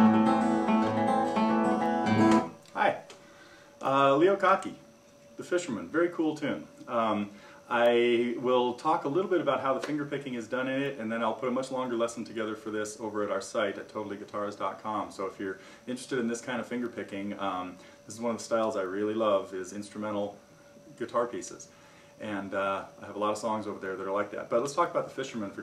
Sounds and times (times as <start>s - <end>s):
Speech: 2.7s - 3.1s, 3.8s - 25.6s.